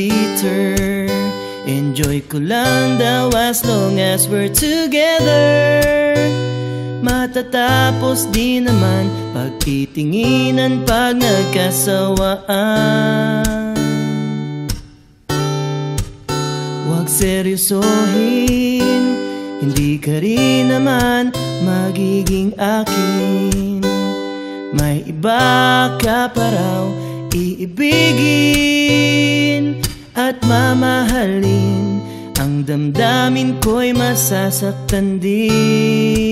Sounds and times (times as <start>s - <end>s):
Music: 0.0s - 36.3s.